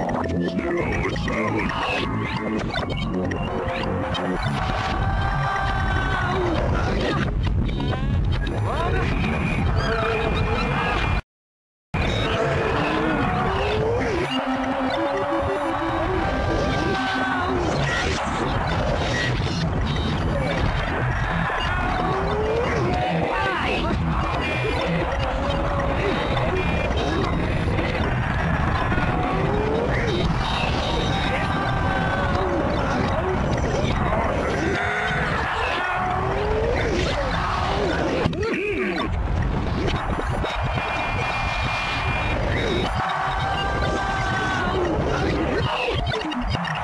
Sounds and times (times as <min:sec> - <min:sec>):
Music: 0:00.0 - 0:11.2, 0:12.0 - 0:46.8.